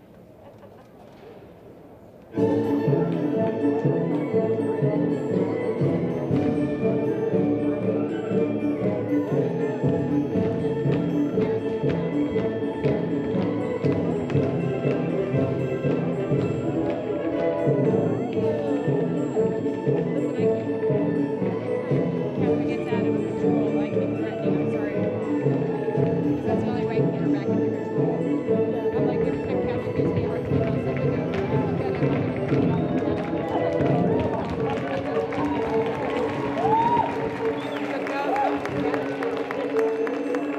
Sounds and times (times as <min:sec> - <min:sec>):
Music: 0:02.3 - 0:40.5
Speech: 0:18.3 - 0:21.0, 0:22.4 - 0:25.8, 0:26.4 - 0:28.0, 0:28.6 - 0:35.8, 0:37.7 - 0:39.5.